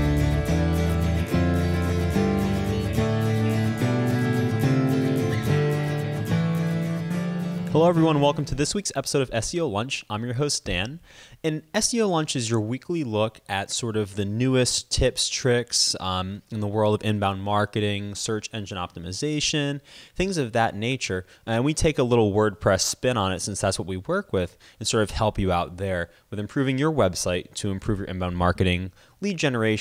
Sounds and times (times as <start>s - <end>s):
Music: 0.0s - 8.7s
Speech: 7.7s - 29.8s.